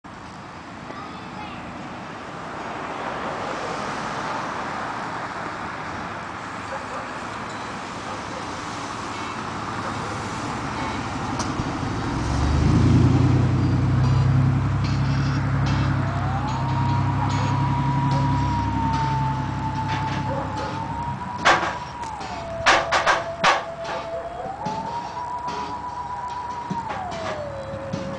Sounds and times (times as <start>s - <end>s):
Traffic noise, roadway noise: 0.0s - 28.1s
Speech: 0.8s - 1.8s.